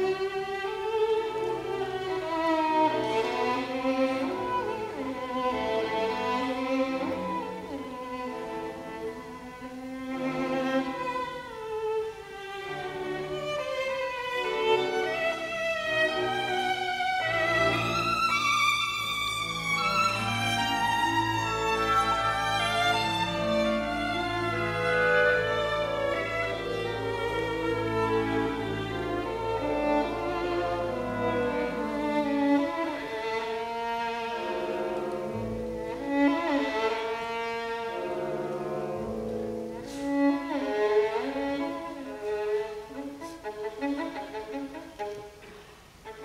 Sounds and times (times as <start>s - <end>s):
Cello: 0.0s - 46.2s
Classical music: 0.0s - 46.2s
Orchestra: 0.0s - 46.2s
Violin, fiddle: 0.0s - 46.2s.